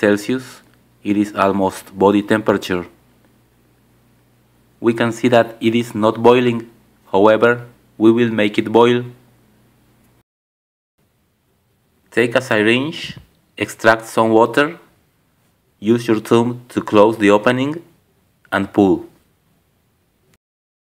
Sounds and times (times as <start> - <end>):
Speech: 0.0 - 3.0, 4.8 - 9.2, 12.1 - 14.9, 15.8 - 19.2.